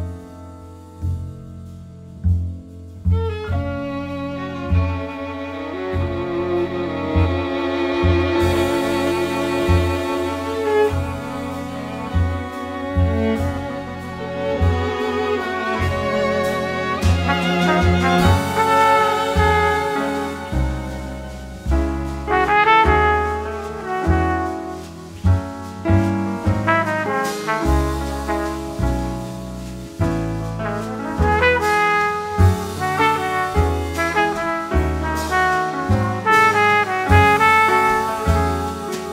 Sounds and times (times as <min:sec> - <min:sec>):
Bowed string instrument: 0:00.0 - 0:39.1.